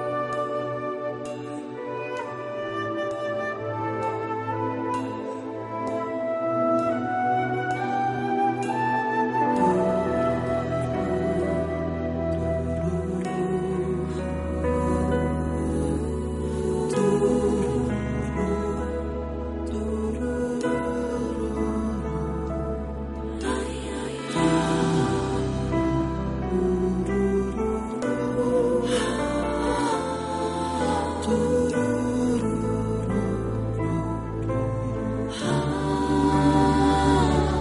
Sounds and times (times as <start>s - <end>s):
Music: 0.0s - 37.6s.